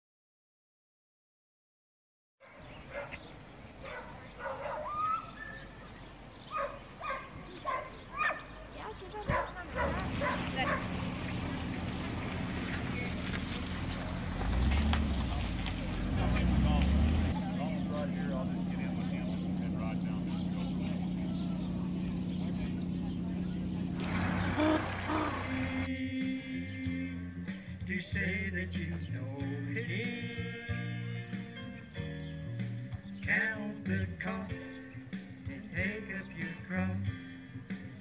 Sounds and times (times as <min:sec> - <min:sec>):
Music: 0:17.4 - 0:38.0.